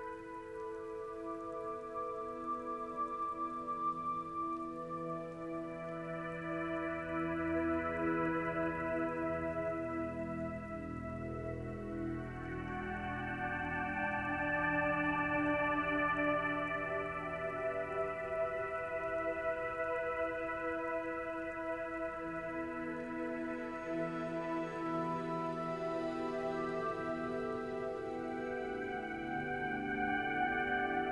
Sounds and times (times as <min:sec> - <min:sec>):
Music: 0:00.0 - 0:31.1.